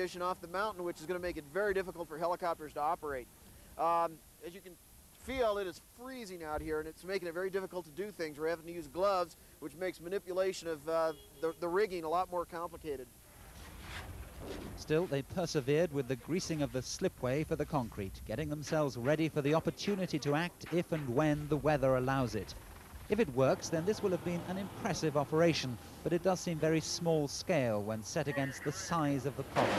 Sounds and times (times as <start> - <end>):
Speech: 0.0 - 13.1, 14.8 - 29.7.